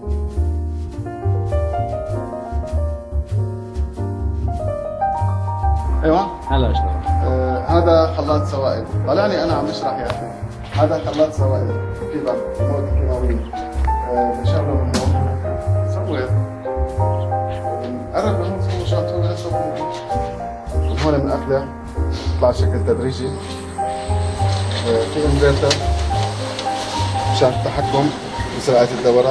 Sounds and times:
Music: 0:00.0 - 0:29.3
Speech: 0:06.0 - 0:13.5, 0:14.1 - 0:16.4, 0:17.6 - 0:19.9, 0:20.8 - 0:21.7, 0:22.3 - 0:23.4, 0:24.8 - 0:25.8, 0:27.3 - 0:29.3.

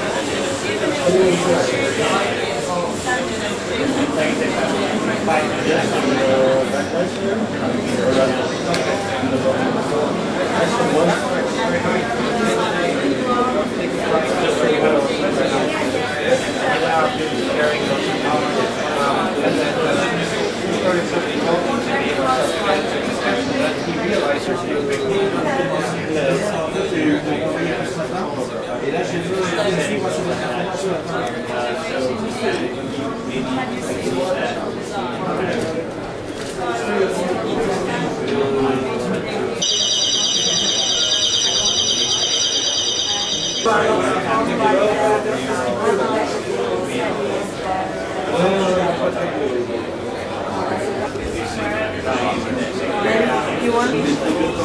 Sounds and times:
Speech: 0:00.0 - 0:54.6.

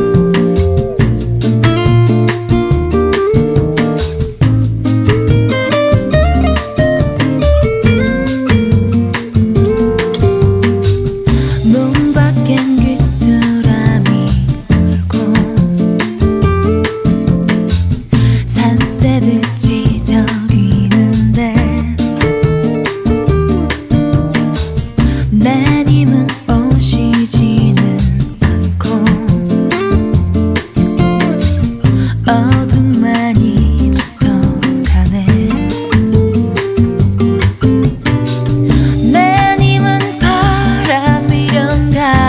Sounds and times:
Music: 0:00.0 - 0:42.2.

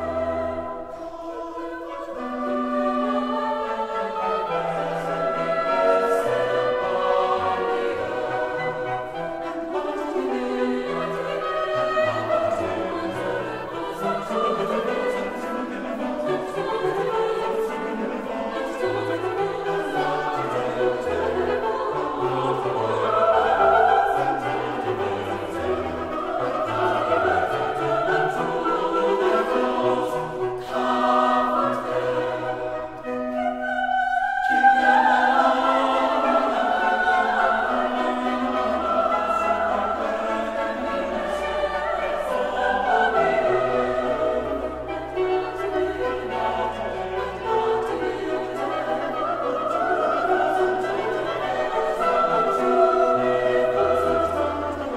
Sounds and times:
Choir: 0:00.0 - 0:54.9
Opera: 0:00.0 - 0:54.9
Orchestra: 0:00.0 - 0:54.9.

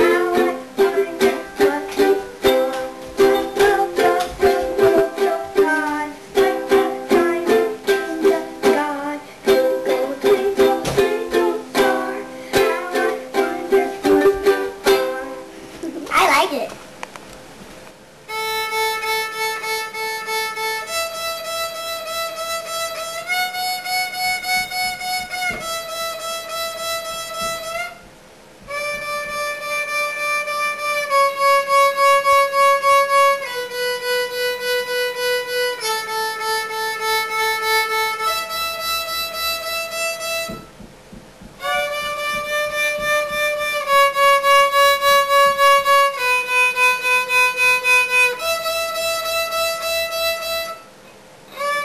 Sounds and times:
Violin, fiddle: 0:00.0 - 0:15.5, 0:18.3 - 0:28.1, 0:28.7 - 0:40.8, 0:41.6 - 0:50.9, 0:51.5 - 0:51.8.

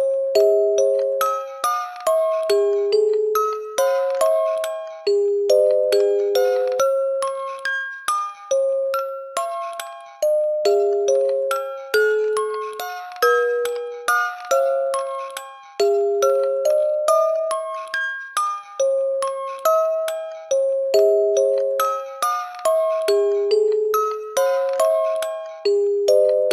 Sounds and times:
Lullaby: 0:00.0 - 0:26.5.

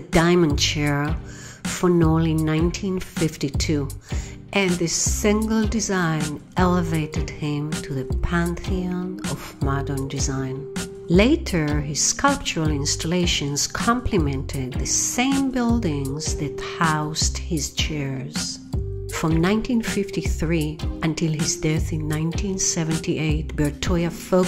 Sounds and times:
Music: 0:00.0 - 0:24.4
Speech: 0:00.0 - 0:24.4.

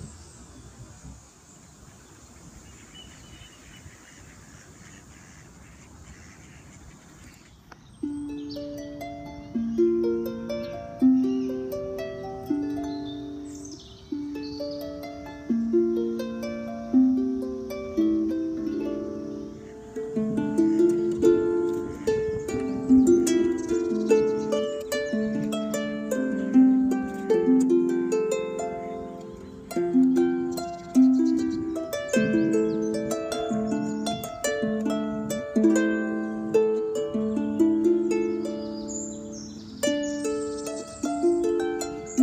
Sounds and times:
Harp: 0:07.9 - 0:42.2.

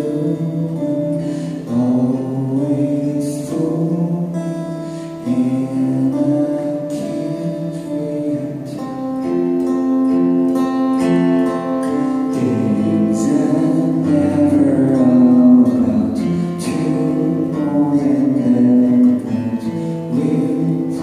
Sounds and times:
Male singing: 0:00.0 - 0:09.0, 0:12.3 - 0:21.0
Music: 0:00.0 - 0:21.0.

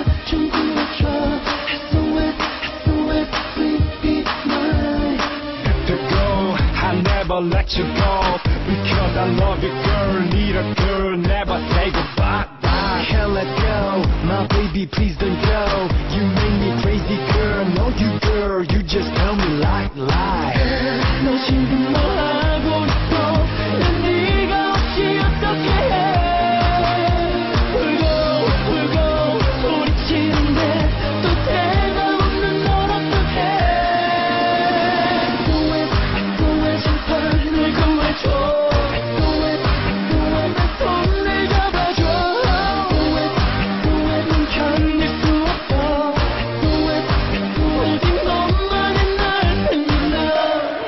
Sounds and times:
Background music: 0:00.0 - 0:50.8
Soundtrack music: 0:00.0 - 0:50.8.

